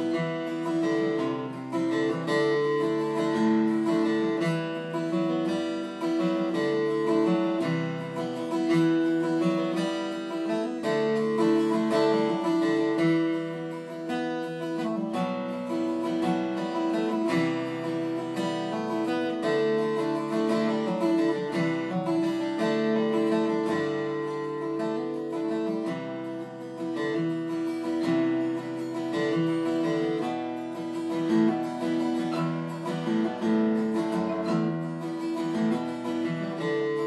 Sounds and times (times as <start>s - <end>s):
Guitar: 0.0s - 37.0s.